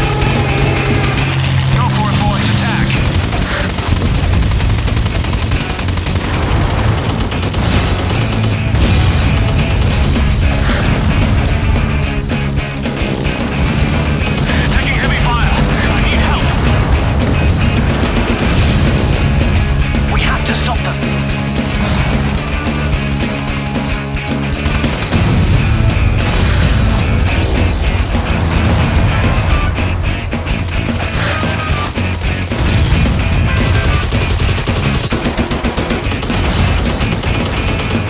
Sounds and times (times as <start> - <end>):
Music: 0.0 - 38.0
Speech: 1.7 - 3.0, 14.4 - 16.6, 20.1 - 21.1.